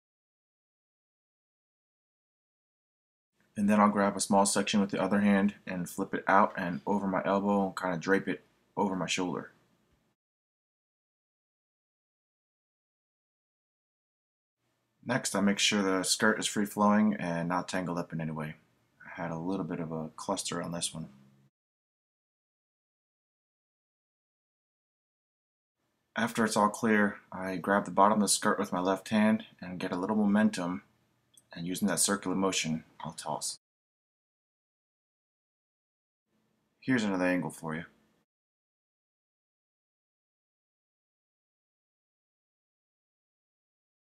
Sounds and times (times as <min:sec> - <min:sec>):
Speech: 0:03.6 - 0:09.6, 0:15.0 - 0:21.2, 0:26.2 - 0:33.6, 0:36.8 - 0:38.0.